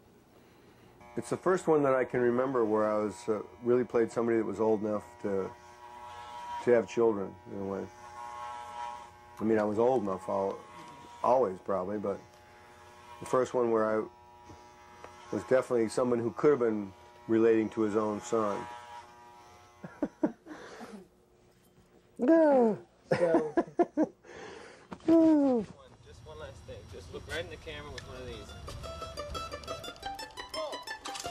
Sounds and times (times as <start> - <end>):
Electric shaver, electric razor: 1.0 - 21.0, 26.5 - 29.4
Speech: 1.2 - 5.5, 6.6 - 7.9, 9.4 - 10.6, 11.2 - 12.2, 13.2 - 14.1, 15.3 - 18.7.